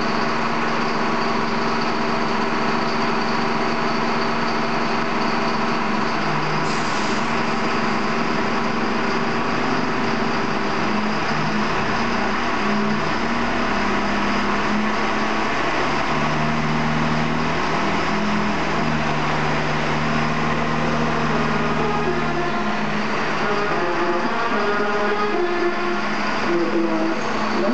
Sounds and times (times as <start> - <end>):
Fire engine, fire truck (siren): 0.0 - 27.7
Truck: 0.0 - 27.7.